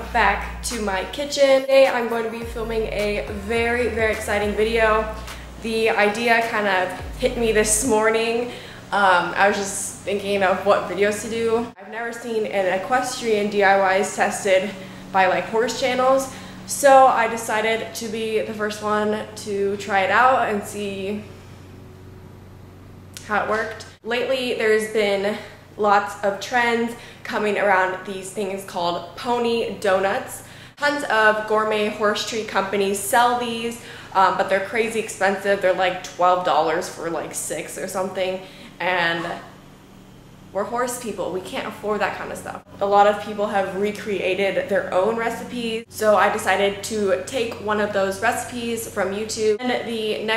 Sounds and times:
Speech: 0.0 - 21.3, 23.2 - 39.5, 40.6 - 50.3.

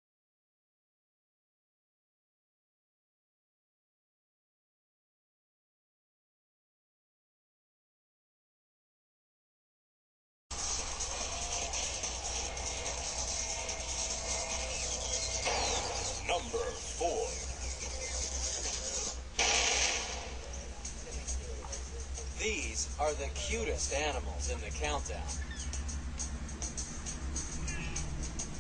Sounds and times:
Music: 10.5 - 28.6
Speech: 16.2 - 17.4, 20.8 - 25.4.

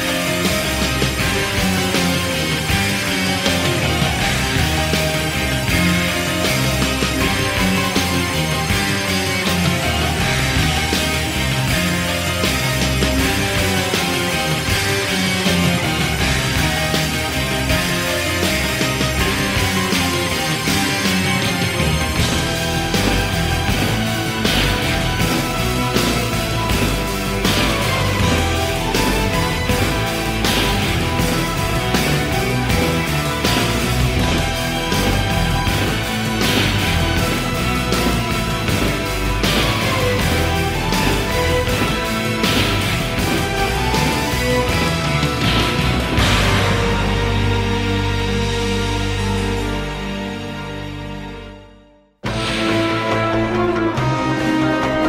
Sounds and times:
Music: 0.0 - 55.0.

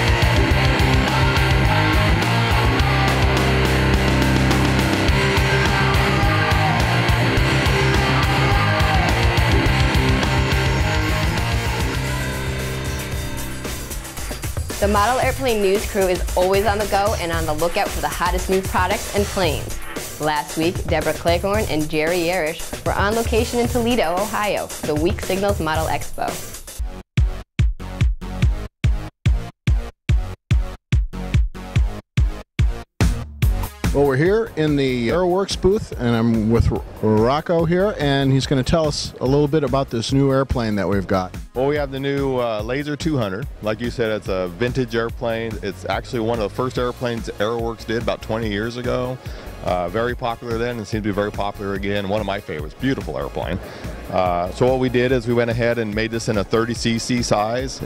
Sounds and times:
Music: 0.0 - 57.8
Speech: 14.8 - 26.4, 33.9 - 57.8.

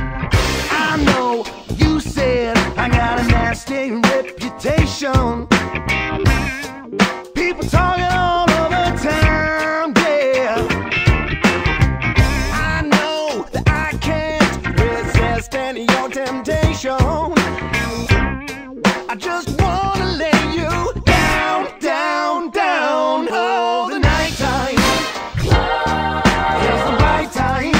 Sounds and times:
Pop music: 0.0 - 27.8.

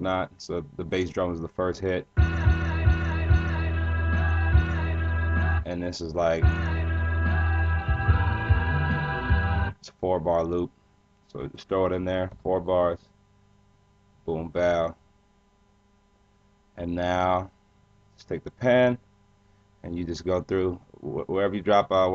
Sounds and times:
Speech: 0.0 - 2.1, 5.7 - 6.4, 9.8 - 10.7, 11.3 - 13.0, 14.3 - 15.0, 16.8 - 17.5, 18.2 - 19.0, 19.8 - 22.1.

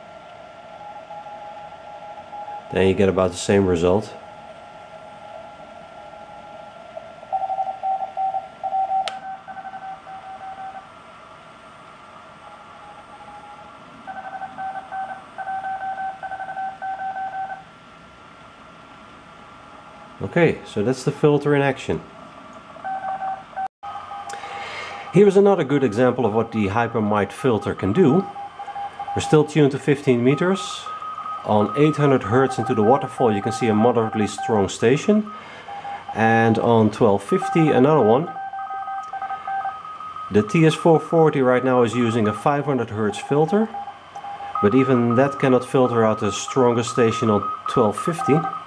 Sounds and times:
Speech: 2.7 - 4.2, 20.2 - 22.1, 25.1 - 28.3, 29.2 - 30.9, 31.5 - 35.3, 36.2 - 38.4, 40.3 - 43.8, 44.6 - 48.6.

